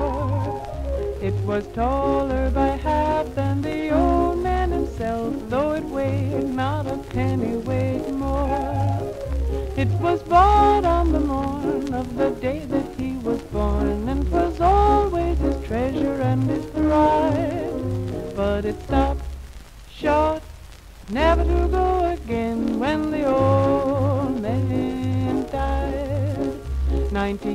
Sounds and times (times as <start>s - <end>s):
Music: 0.0s - 27.5s.